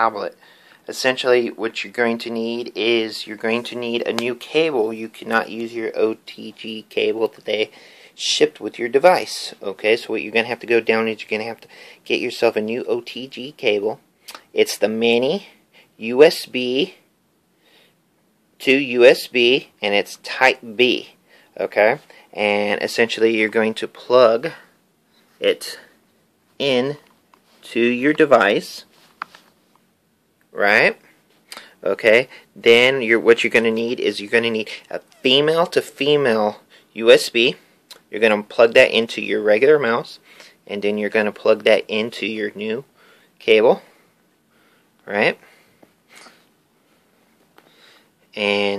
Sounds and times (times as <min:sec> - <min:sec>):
Speech: 0:00.0 - 0:17.0, 0:18.6 - 0:24.7, 0:25.4 - 0:26.0, 0:26.6 - 0:28.9, 0:30.5 - 0:31.0, 0:31.8 - 0:43.9, 0:45.0 - 0:45.4, 0:48.4 - 0:48.7.